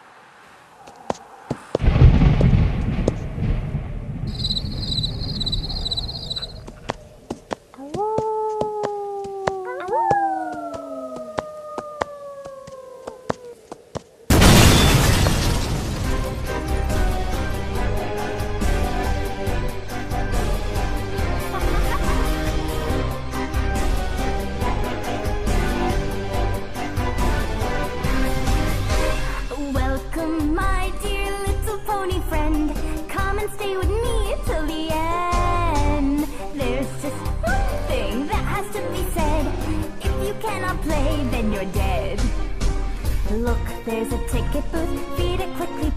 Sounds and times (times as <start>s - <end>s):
Domestic animals, pets: 5.0s - 7.3s, 9.4s - 13.7s.